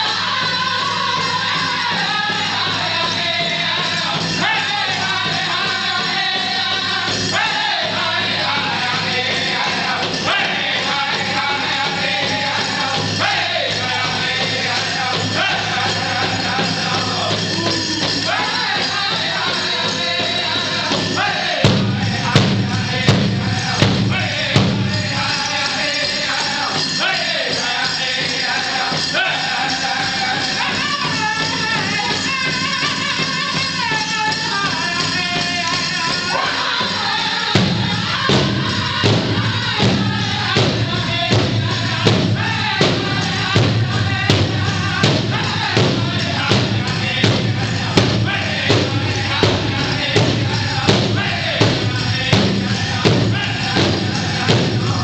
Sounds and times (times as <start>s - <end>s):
Music: 0.0s - 55.0s.